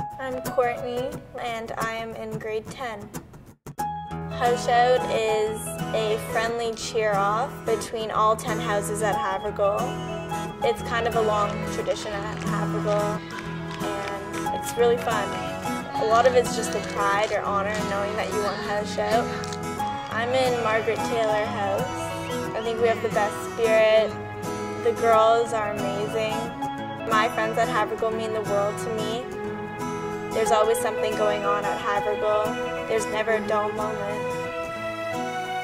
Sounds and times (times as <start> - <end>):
Music: 0.0 - 35.6
Speech: 0.2 - 3.1, 4.4 - 9.9, 10.7 - 13.2, 16.0 - 19.4, 20.1 - 22.0, 22.6 - 24.1, 27.1 - 29.2, 30.4 - 34.2.